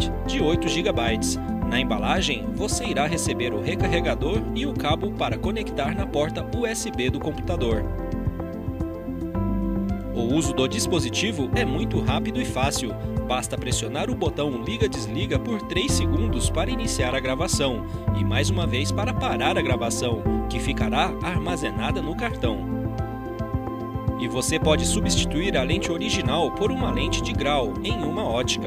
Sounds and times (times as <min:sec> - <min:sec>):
Speech: 0:00.0 - 0:07.9, 0:10.2 - 0:22.7, 0:24.2 - 0:28.6
Music: 0:00.0 - 0:28.6.